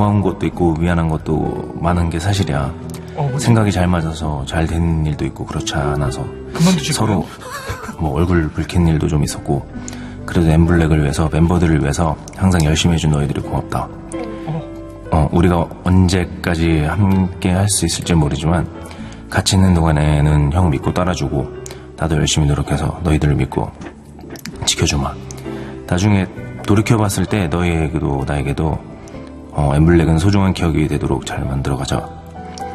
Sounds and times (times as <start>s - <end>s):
Speech: 0.0s - 7.4s, 8.0s - 9.7s, 10.3s - 18.7s, 19.3s - 23.8s, 24.5s - 25.2s, 25.9s - 28.8s, 29.6s - 32.0s
Music: 0.0s - 32.7s.